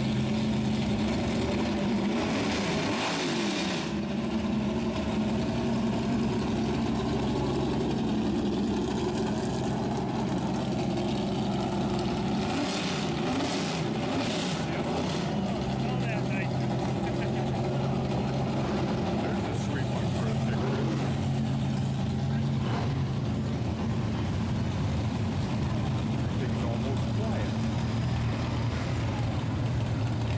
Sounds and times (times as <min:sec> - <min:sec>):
Speech: 0:15.8 - 0:17.7, 0:19.2 - 0:20.9, 0:26.2 - 0:27.6.